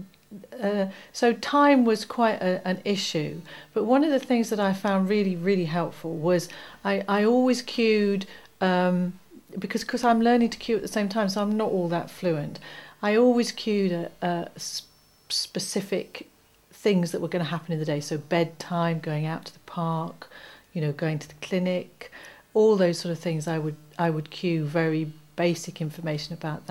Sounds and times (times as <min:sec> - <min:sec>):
Narration, monologue: 0:00.0 - 0:26.7
Female speech, woman speaking: 0:00.4 - 0:26.7.